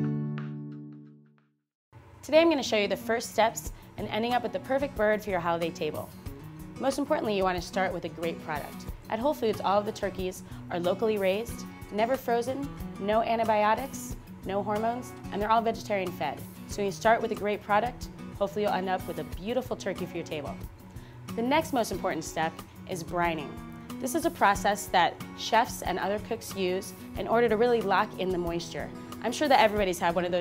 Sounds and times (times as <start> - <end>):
Music: 0.0 - 1.6, 2.2 - 30.4
Speech: 2.2 - 6.1, 6.8 - 20.6, 21.4 - 30.4.